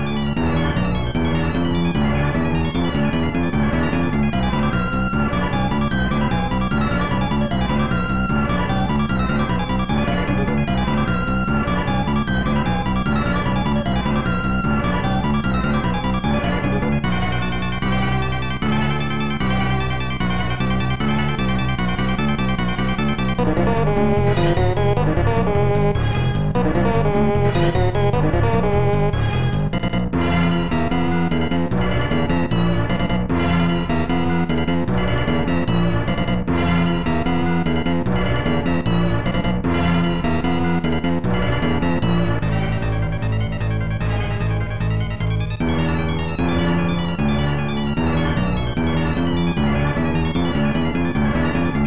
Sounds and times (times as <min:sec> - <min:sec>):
Music: 0:00.0 - 0:51.8.